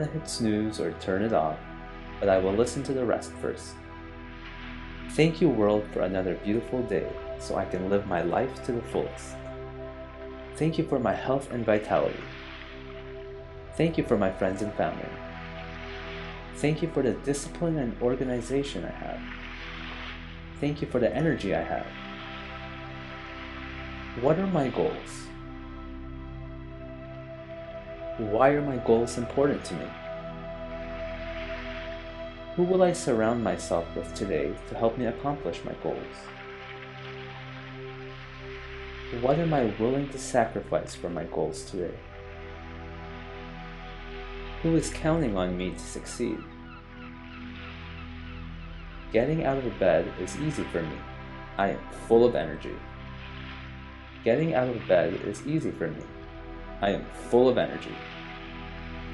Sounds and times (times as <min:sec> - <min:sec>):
Speech: 0:00.0 - 0:01.6, 0:02.2 - 0:03.8, 0:05.1 - 0:09.4, 0:10.6 - 0:12.3, 0:13.8 - 0:15.2, 0:16.6 - 0:19.2, 0:20.6 - 0:21.9, 0:24.2 - 0:25.3, 0:28.2 - 0:30.0, 0:32.6 - 0:36.3, 0:39.2 - 0:42.0, 0:44.6 - 0:46.5, 0:49.2 - 0:51.0, 0:51.6 - 0:52.8, 0:54.3 - 0:56.1, 0:56.8 - 0:58.0
Music: 0:00.0 - 0:59.1.